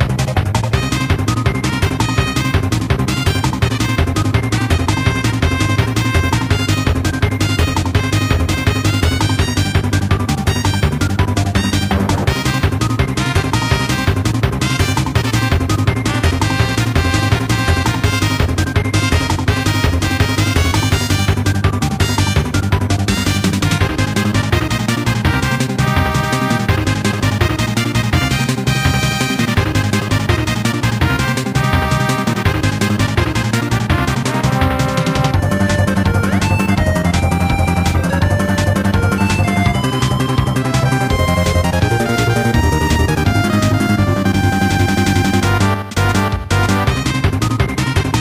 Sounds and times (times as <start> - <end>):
Video game music: 0.0 - 48.2.